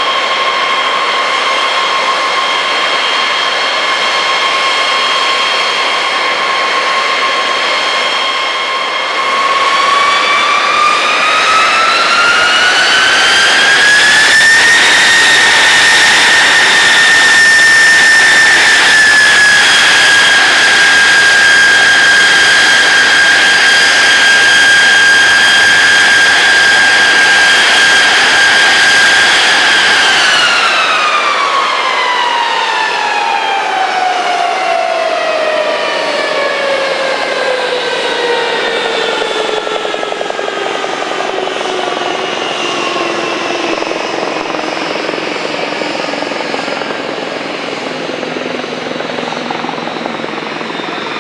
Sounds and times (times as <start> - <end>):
Fixed-wing aircraft, airplane: 0.0 - 51.2.